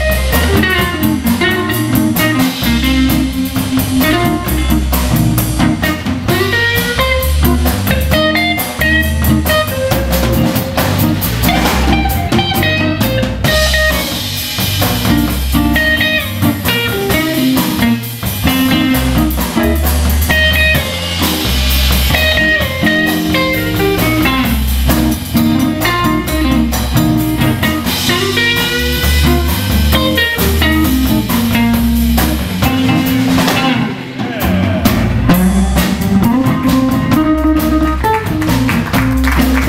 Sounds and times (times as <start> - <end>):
Bass drum: 0.0 - 39.6
Drum kit: 0.0 - 39.6
Rimshot: 0.4 - 39.6.